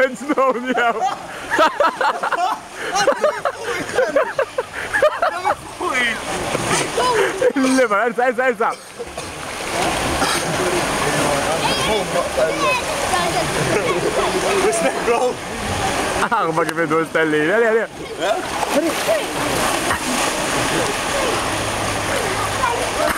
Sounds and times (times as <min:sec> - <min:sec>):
Water: 0:00.0 - 0:23.1.